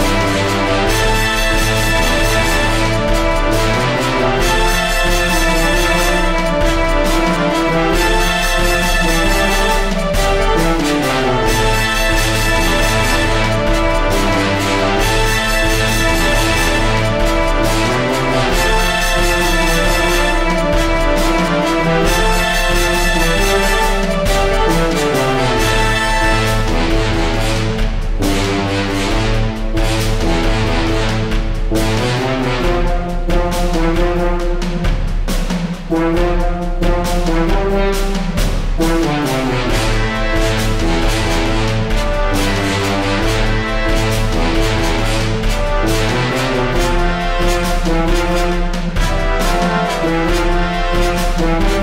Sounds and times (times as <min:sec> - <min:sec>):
Background music: 0:00.0 - 0:51.8
Theme music: 0:00.0 - 0:51.8.